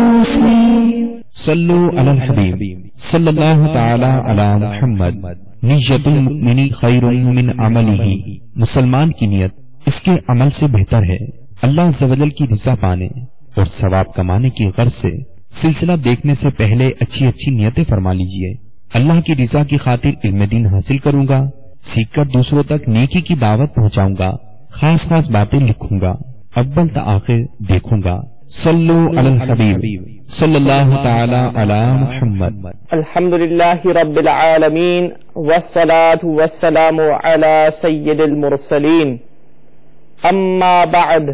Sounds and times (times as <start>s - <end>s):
Speech synthesizer: 0.0s - 9.2s, 25.1s - 39.2s
Male speech, man speaking: 0.0s - 39.3s, 40.2s - 41.3s
Narration, monologue: 0.0s - 41.3s.